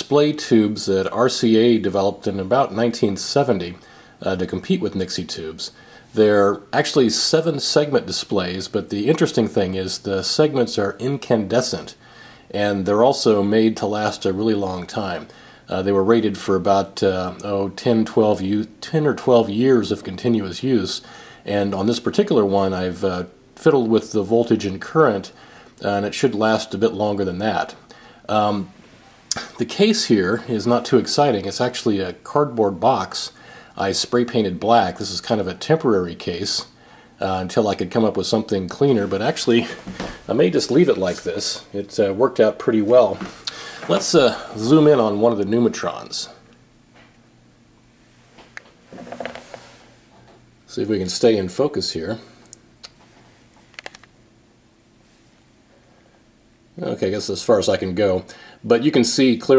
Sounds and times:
Speech: 0.0s - 46.5s, 50.7s - 52.4s, 56.8s - 59.5s.

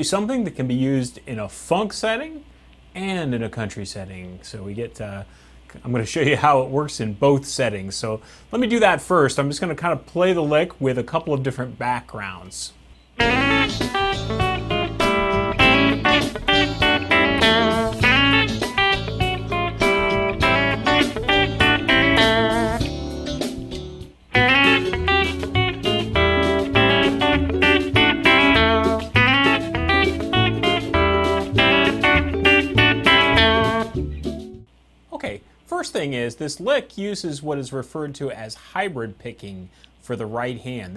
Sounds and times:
Electric guitar: 13.2s - 34.7s
Strum: 13.2s - 34.7s.

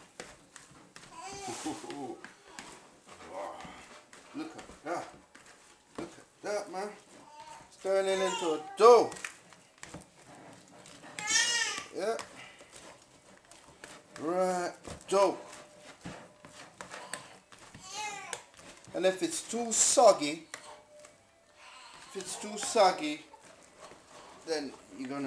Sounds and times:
Inside, small room: 0.0s - 25.2s
Speech: 7.8s - 9.2s, 22.2s - 23.3s, 24.5s - 25.2s.

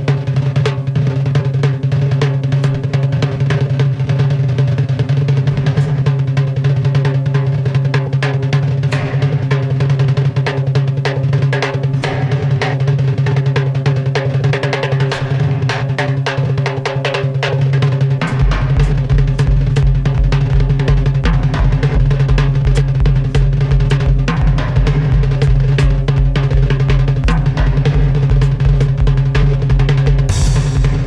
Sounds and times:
Drum kit: 0.0s - 31.0s
Bass drum: 5.1s - 13.5s, 18.1s - 31.0s.

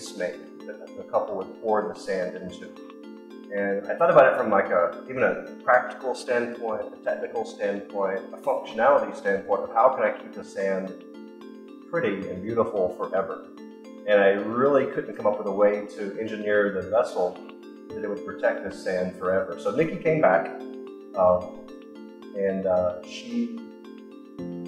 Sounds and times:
Speech: 0.0s - 2.7s, 3.5s - 10.9s, 12.0s - 13.4s, 14.1s - 17.4s, 18.0s - 20.6s, 21.2s - 21.5s, 22.4s - 23.7s
Music: 0.0s - 24.6s.

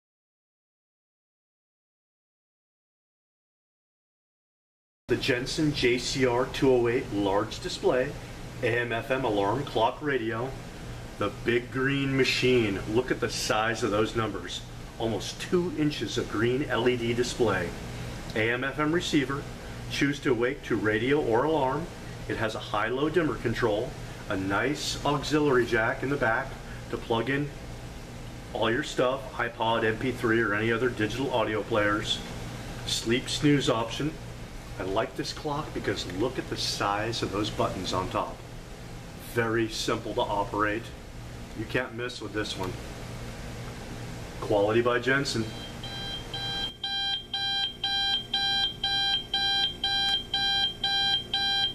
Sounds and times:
Speech: 5.1s - 10.6s, 11.2s - 27.6s, 28.5s - 32.3s, 32.9s - 34.2s, 34.8s - 38.5s, 39.2s - 41.0s, 41.6s - 42.8s, 44.4s - 45.6s.

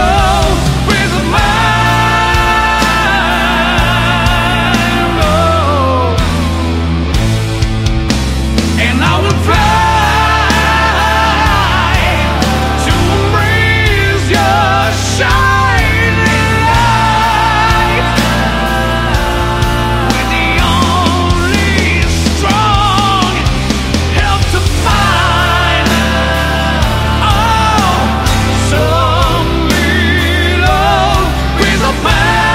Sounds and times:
Singing: 0.0s - 6.6s, 8.8s - 32.5s
Progressive rock: 0.0s - 32.5s.

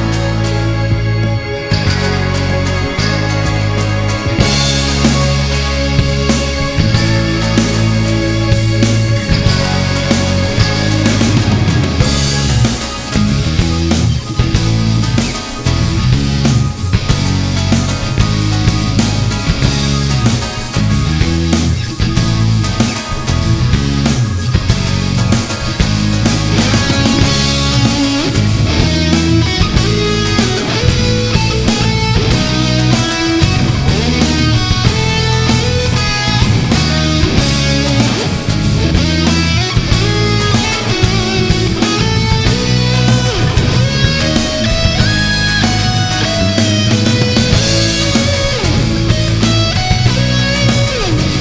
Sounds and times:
Music: 0.0s - 51.4s.

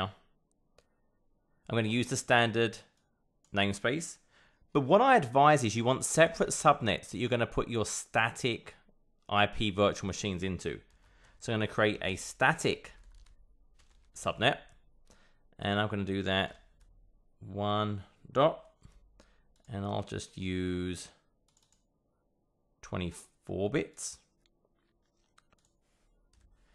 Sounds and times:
Speech: 0.0s - 0.2s, 1.7s - 4.2s, 4.8s - 13.0s, 14.2s - 14.7s, 15.6s - 16.6s, 17.4s - 18.7s, 19.7s - 21.2s, 22.8s - 24.3s.

